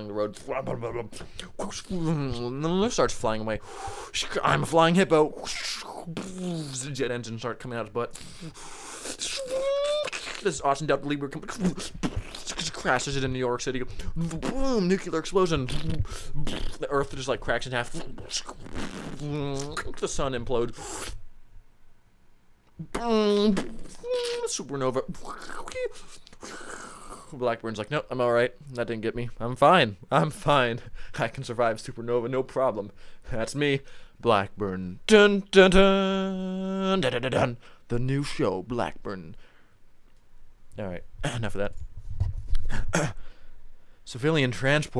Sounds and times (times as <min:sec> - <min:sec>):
Speech: 0:00.0 - 0:08.2, 0:09.3 - 0:11.9, 0:12.5 - 0:18.6, 0:19.2 - 0:20.8, 0:22.8 - 0:26.0, 0:27.3 - 0:39.4, 0:40.8 - 0:41.8, 0:44.1 - 0:44.9.